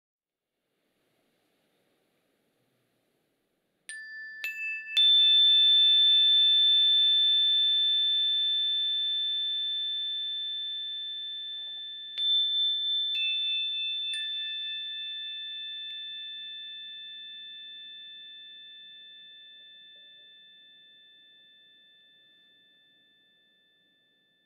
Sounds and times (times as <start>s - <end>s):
Chime: 3.9s - 24.4s.